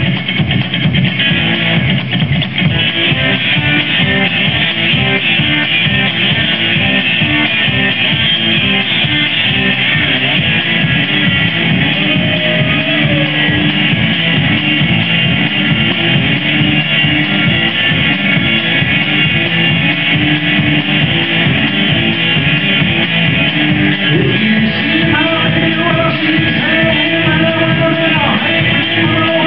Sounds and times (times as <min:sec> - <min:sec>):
Blues: 0:00.0 - 0:29.4.